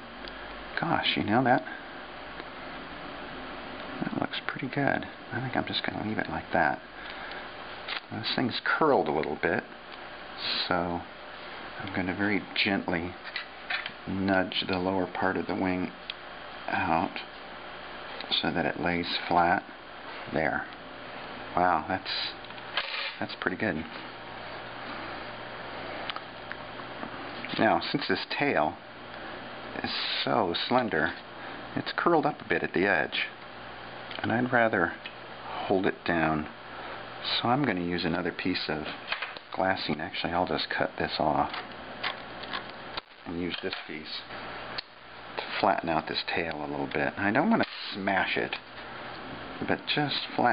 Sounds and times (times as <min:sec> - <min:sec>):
Speech: 0:00.8 - 0:01.8, 0:04.0 - 0:06.8, 0:08.1 - 0:09.8, 0:10.4 - 0:11.1, 0:11.8 - 0:13.2, 0:14.1 - 0:16.0, 0:16.7 - 0:17.3, 0:18.3 - 0:19.7, 0:20.3 - 0:20.7, 0:21.6 - 0:22.4, 0:23.2 - 0:24.0, 0:27.5 - 0:28.8, 0:29.8 - 0:31.2, 0:31.8 - 0:33.4, 0:34.2 - 0:36.6, 0:37.2 - 0:39.0, 0:39.6 - 0:41.6, 0:43.2 - 0:44.3, 0:45.4 - 0:48.6, 0:49.6 - 0:50.5.